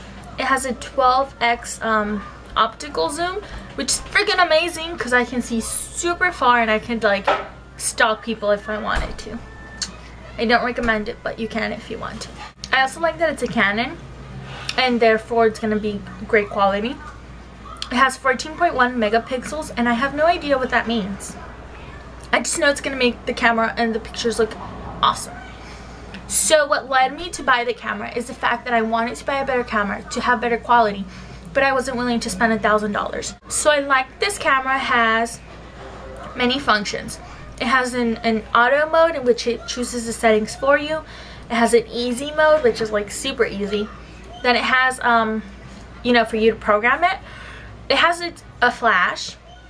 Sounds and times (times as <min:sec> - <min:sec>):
Speech: 0:00.2 - 0:14.0, 0:14.7 - 0:17.2, 0:17.8 - 0:25.4, 0:26.3 - 0:35.4, 0:36.3 - 0:47.2, 0:47.9 - 0:49.4.